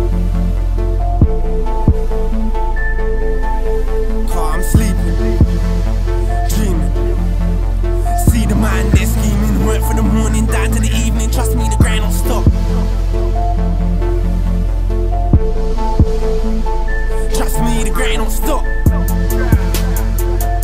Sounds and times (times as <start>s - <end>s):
Music: 0.0s - 20.6s.